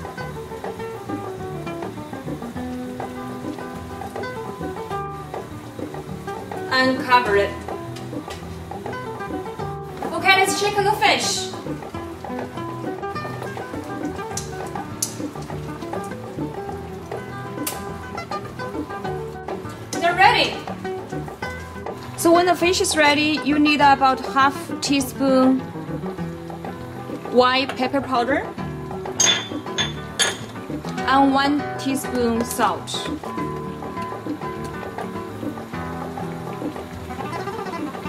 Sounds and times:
Music: 0.0 - 38.0
Speech: 6.7 - 7.6, 10.1 - 11.6, 20.0 - 20.6, 22.2 - 25.6, 27.4 - 28.5, 31.1 - 33.1.

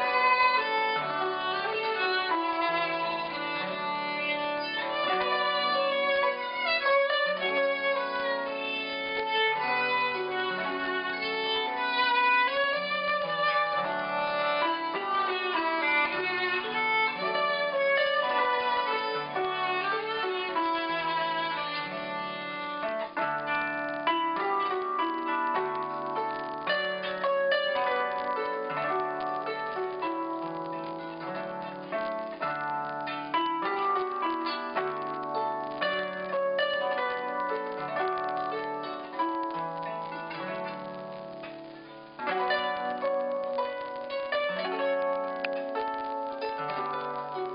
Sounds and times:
Violin, fiddle: 0.0 - 29.0.

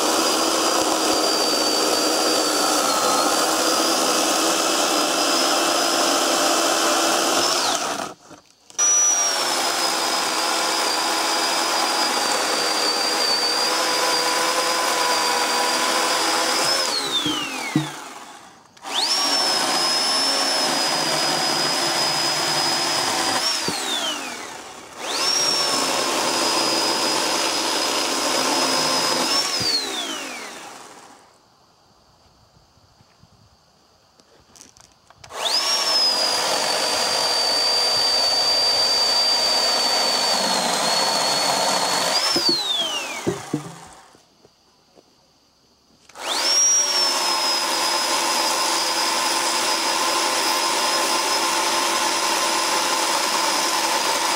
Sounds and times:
Chainsaw: 0.0 - 31.4, 34.6 - 44.2, 46.0 - 54.3
Tools: 17.0 - 18.1, 42.2 - 43.9.

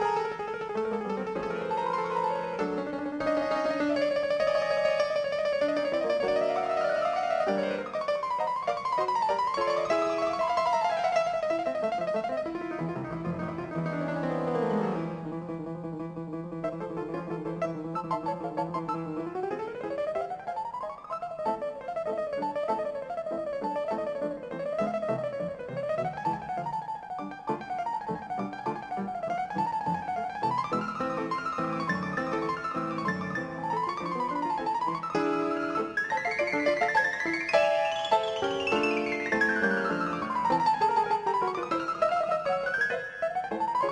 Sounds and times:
Music: 0.0 - 43.9.

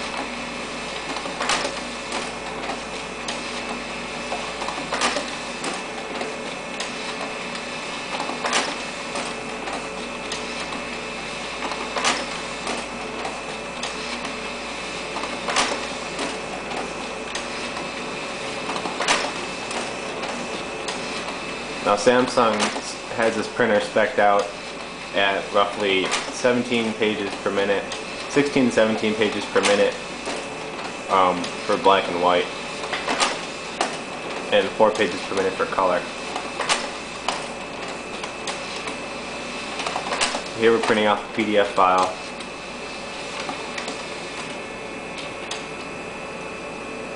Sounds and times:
Printer: 0.0 - 47.1
Speech: 21.8 - 24.6, 25.2 - 30.0, 31.1 - 32.6, 34.5 - 36.1, 40.6 - 42.2.

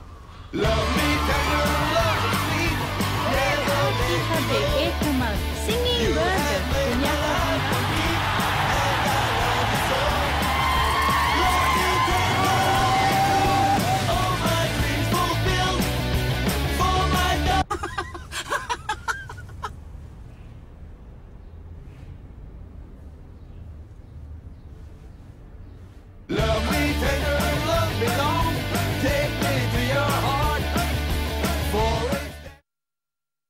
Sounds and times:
Male singing: 0.6 - 16.0, 16.6 - 17.7, 26.3 - 32.6
Music: 0.6 - 17.7, 26.3 - 32.6.

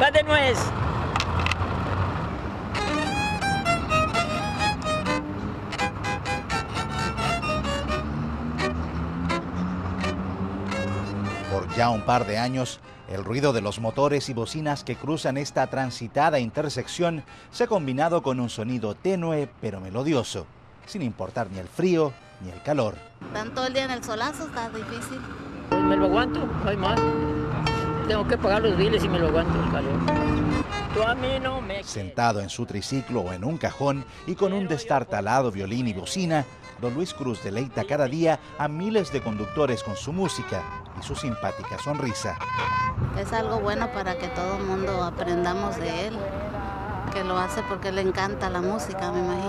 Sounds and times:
Violin, fiddle: 2.8 - 19.7, 32.8 - 43.0.

